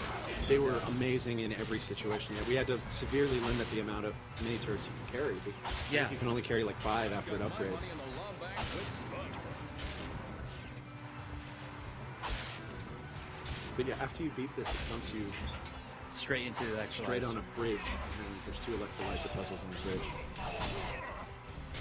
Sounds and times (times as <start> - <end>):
Music: 0.0 - 21.8
Speech: 0.4 - 8.6, 13.8 - 15.4, 16.2 - 20.2.